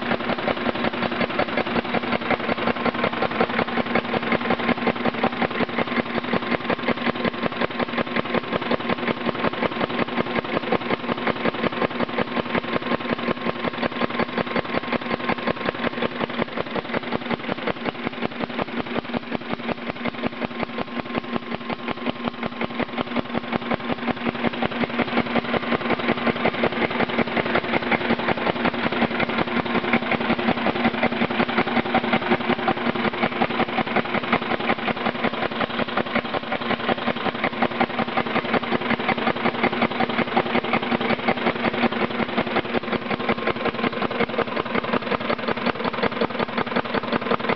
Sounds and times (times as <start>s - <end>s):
Idling: 0.0s - 47.5s
Medium engine (mid frequency): 0.0s - 47.5s.